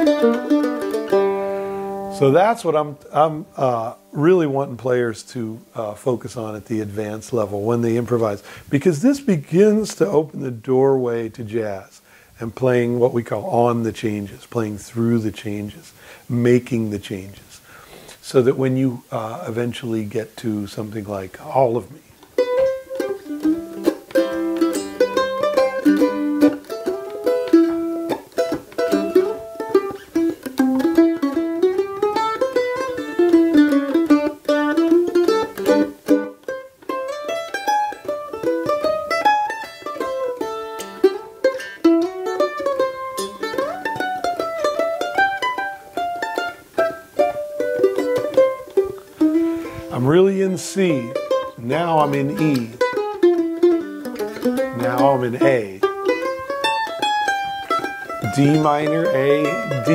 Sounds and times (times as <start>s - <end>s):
Guitar: 0.0s - 59.9s
Mandolin: 0.0s - 59.9s.